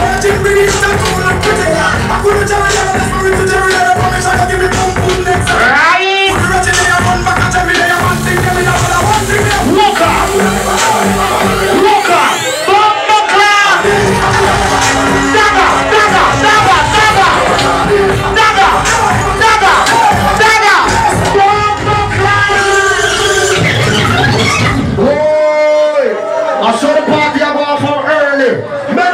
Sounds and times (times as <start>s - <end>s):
Music: 0.0s - 25.3s
Speech: 25.0s - 29.1s.